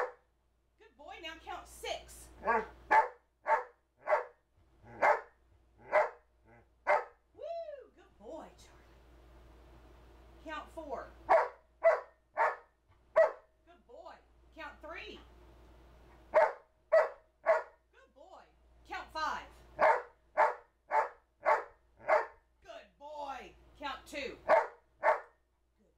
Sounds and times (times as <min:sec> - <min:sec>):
Speech: 0:00.8 - 0:02.4, 0:07.7 - 0:08.9, 0:10.4 - 0:11.2, 0:13.7 - 0:15.3, 0:17.9 - 0:19.6, 0:22.6 - 0:24.5
Yip: 0:02.4 - 0:04.4, 0:05.0 - 0:05.3, 0:11.3 - 0:12.6, 0:13.2 - 0:13.4, 0:16.4 - 0:17.7, 0:19.8 - 0:22.4, 0:24.5 - 0:25.3
Bow-wow: 0:02.4 - 0:06.2, 0:06.9 - 0:07.1, 0:11.3 - 0:12.6, 0:13.2 - 0:13.4, 0:16.4 - 0:17.7, 0:19.8 - 0:22.4, 0:24.5 - 0:25.3.